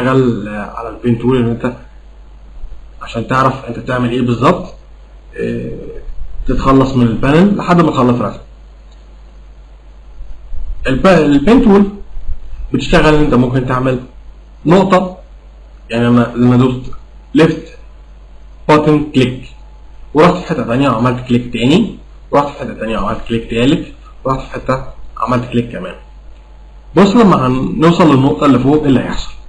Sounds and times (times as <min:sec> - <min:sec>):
Speech: 0:00.0 - 0:01.9, 0:03.0 - 0:08.5, 0:10.8 - 0:12.1, 0:12.7 - 0:15.3, 0:15.9 - 0:17.9, 0:18.7 - 0:19.6, 0:20.2 - 0:26.1, 0:27.0 - 0:29.4.